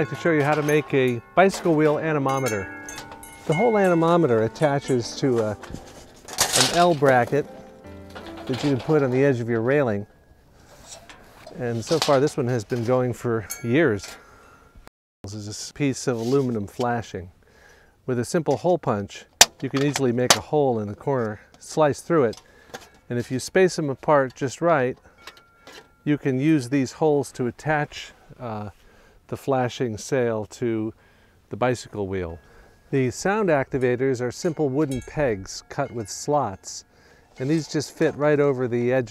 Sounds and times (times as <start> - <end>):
Speech: 0.0 - 2.7, 3.5 - 5.6, 6.5 - 7.5, 8.5 - 10.1, 11.5 - 14.2, 15.3 - 17.3, 18.1 - 22.4, 23.1 - 25.0, 26.1 - 39.1.